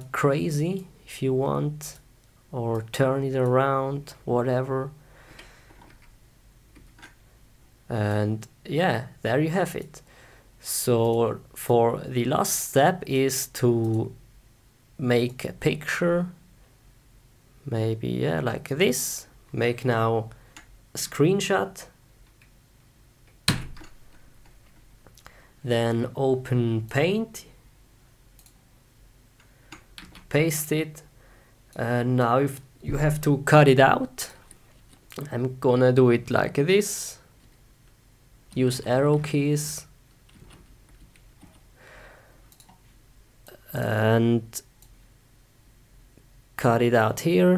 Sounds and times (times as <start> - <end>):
Speech: 0.0 - 5.0, 7.9 - 10.0, 10.6 - 14.2, 15.0 - 16.4, 17.6 - 20.4, 21.0 - 22.0, 25.6 - 27.6, 30.3 - 31.1, 31.8 - 34.4, 35.2 - 37.3, 38.5 - 39.9, 43.5 - 44.7, 46.6 - 47.5.